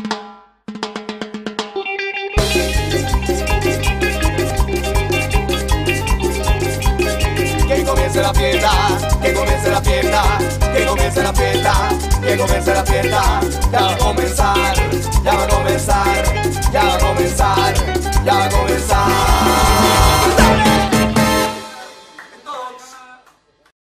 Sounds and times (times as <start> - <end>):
Music: 0.0 - 22.9
Speech: 22.3 - 23.3.